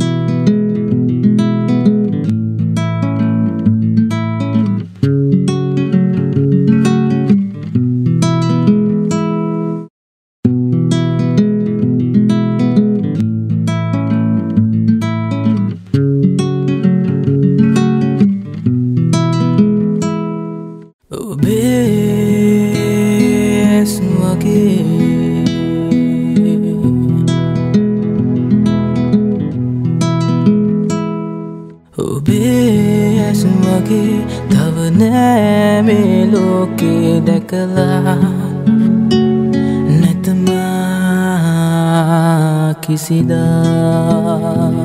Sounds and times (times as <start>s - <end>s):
Independent music: 21.2s - 41.8s.